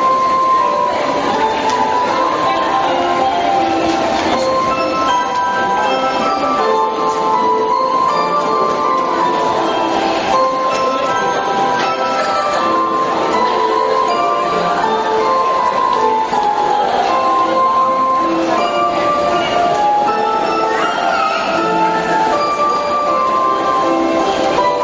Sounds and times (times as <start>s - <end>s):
Music: 0.0s - 24.8s
Speech: 0.0s - 24.8s.